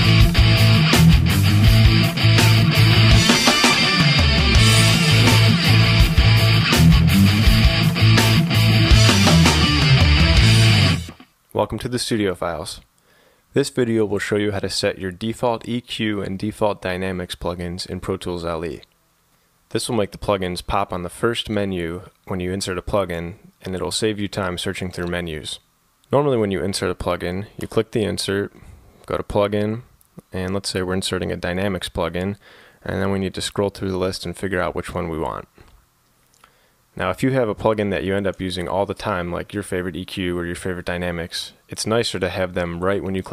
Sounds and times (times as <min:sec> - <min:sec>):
Speech: 0:11.5 - 0:12.9, 0:13.6 - 0:18.9, 0:19.7 - 0:35.6, 0:37.0 - 0:43.3.